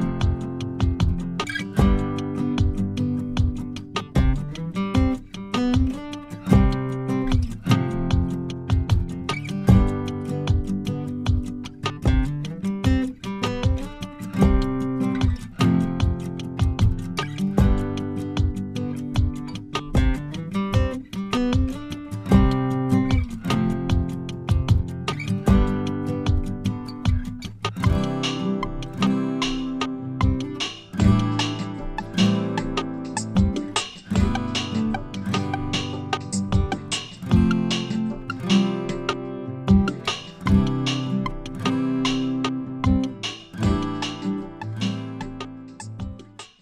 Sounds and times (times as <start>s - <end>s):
Music: 0.0s - 46.6s.